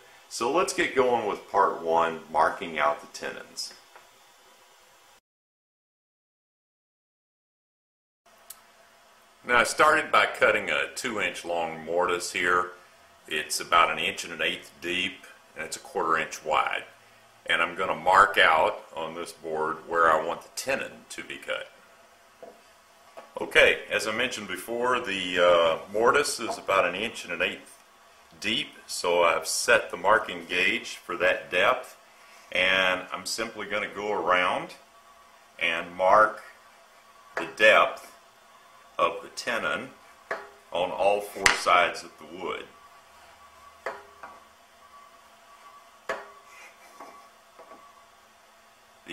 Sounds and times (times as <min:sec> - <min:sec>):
Speech: 0:00.3 - 0:03.8, 0:09.5 - 0:21.8, 0:23.4 - 0:27.7, 0:28.4 - 0:32.0, 0:32.6 - 0:34.8, 0:35.6 - 0:36.6, 0:37.4 - 0:38.2, 0:39.0 - 0:40.0, 0:40.8 - 0:42.8.